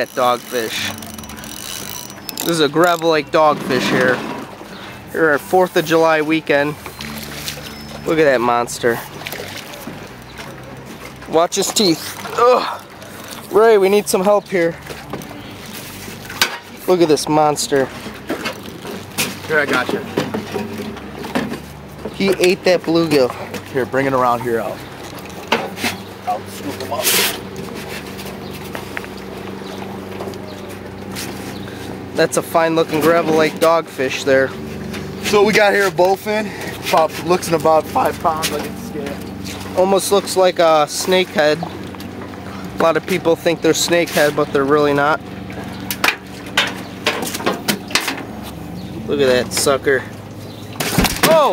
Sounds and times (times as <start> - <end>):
Outside, rural or natural: 0.0 - 51.5.